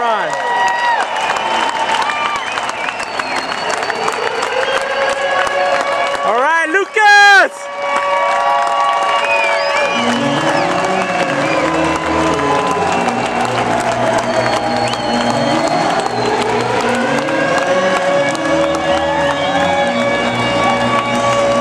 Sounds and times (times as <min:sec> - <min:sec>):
Run: 0:00.0 - 0:21.6
Music: 0:02.4 - 0:06.4, 0:07.6 - 0:21.6.